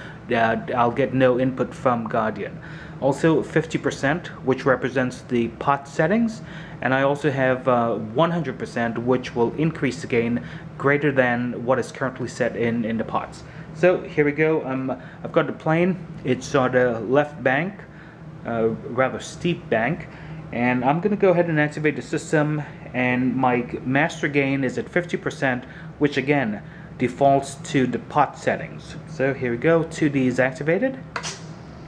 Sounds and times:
Speech: 0.3 - 31.1.

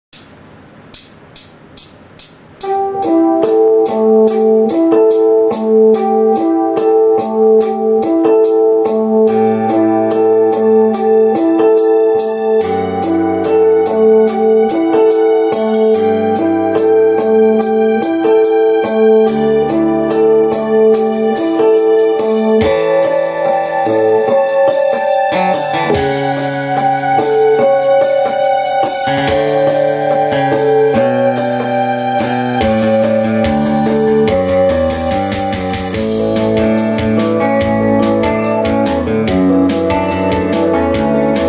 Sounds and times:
Inside, small room: 0.1 - 41.4
Guitar: 2.6 - 41.4.

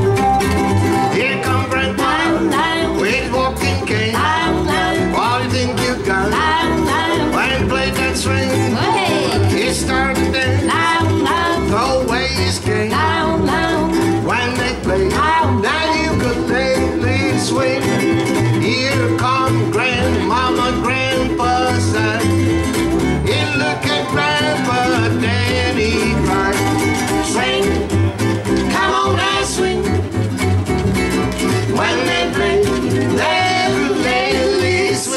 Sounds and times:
Bluegrass: 0.0 - 35.1
Guitar: 0.0 - 35.1
Ukulele: 0.0 - 35.1
Singing: 1.1 - 22.3, 23.3 - 28.0, 28.6 - 30.0, 31.7 - 35.1.

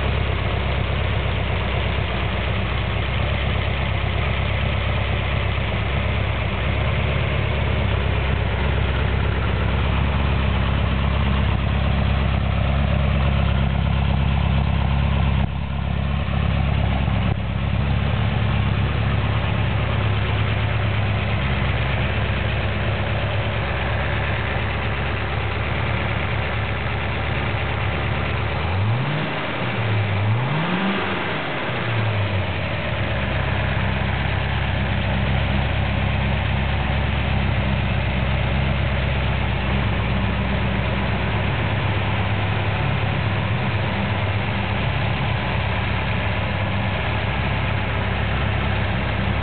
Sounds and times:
Medium engine (mid frequency): 0.0 - 49.4.

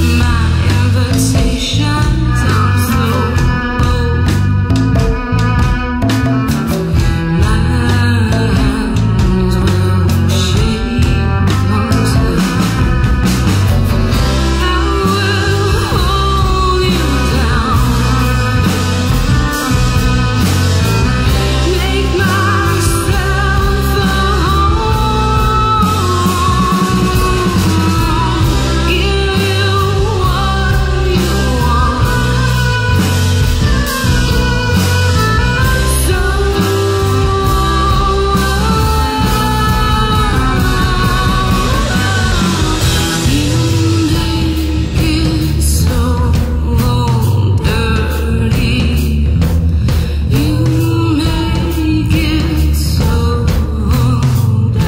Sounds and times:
Music: 0.0 - 54.8.

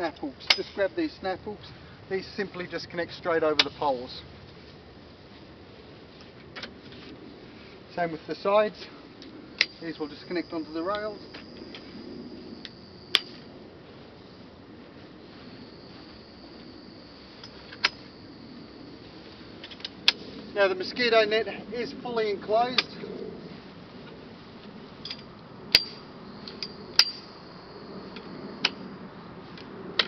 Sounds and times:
Speech: 0.0 - 4.3, 7.9 - 9.0, 9.8 - 11.2, 20.6 - 23.1.

